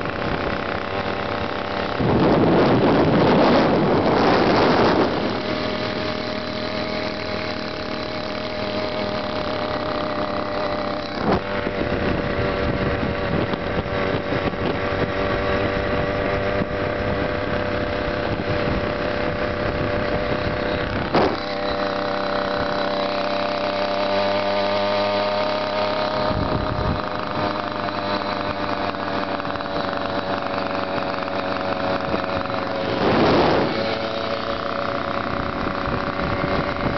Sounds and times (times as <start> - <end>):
Bicycle: 0.0 - 36.9.